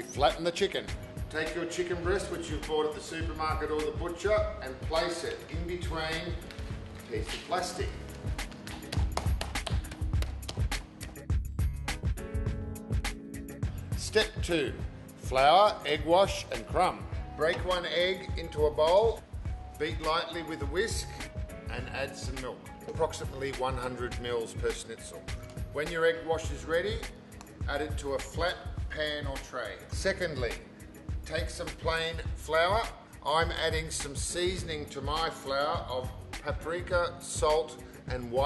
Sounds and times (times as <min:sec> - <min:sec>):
Speech: 0:00.0 - 0:06.4, 0:07.1 - 0:08.0, 0:14.0 - 0:19.2, 0:19.8 - 0:25.2, 0:25.8 - 0:27.1, 0:27.7 - 0:30.6, 0:31.3 - 0:38.4
Music: 0:00.0 - 0:38.4.